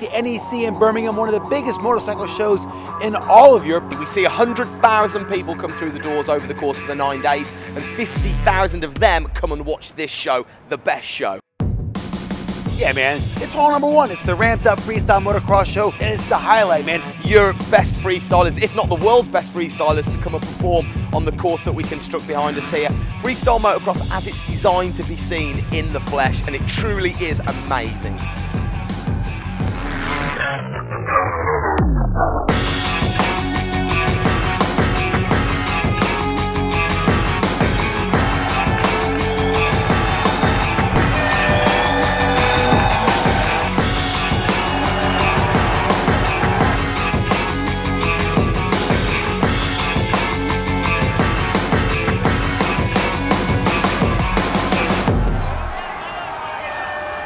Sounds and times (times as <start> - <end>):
Music: 0.0 - 9.8, 11.6 - 57.2
Speech: 0.0 - 11.4, 12.8 - 28.1.